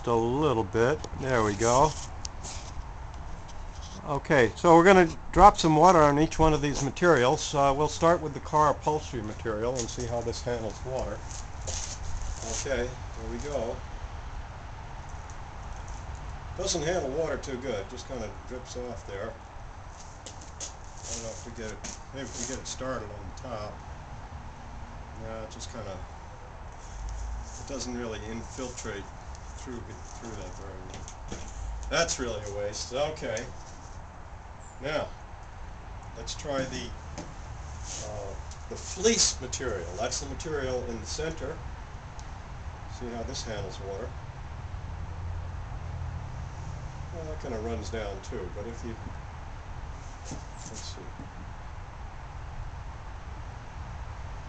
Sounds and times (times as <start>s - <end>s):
Speech: 0.0s - 2.0s, 4.0s - 11.2s, 12.4s - 13.8s, 16.6s - 19.4s, 21.1s - 23.8s, 25.2s - 26.1s, 27.6s - 31.0s, 31.9s - 33.6s, 34.8s - 35.2s, 36.2s - 37.0s, 38.0s - 41.6s, 42.9s - 44.2s, 47.2s - 49.1s, 50.7s - 51.2s.